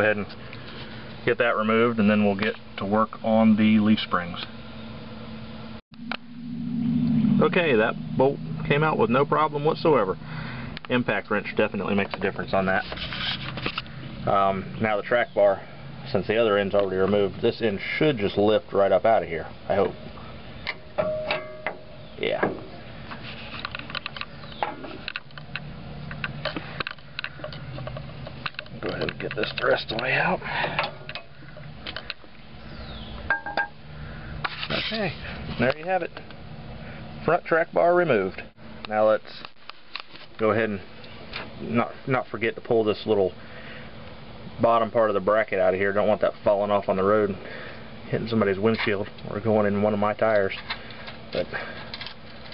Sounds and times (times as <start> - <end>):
Speech: 0.0 - 0.3, 1.3 - 4.5, 7.4 - 10.2, 10.9 - 12.9, 14.3 - 20.0, 22.2 - 22.6, 28.8 - 30.4, 34.7 - 36.2, 37.2 - 39.5, 40.4 - 40.9, 41.6 - 43.4, 44.6 - 47.4, 48.1 - 50.6
Outside, rural or natural: 0.0 - 52.5.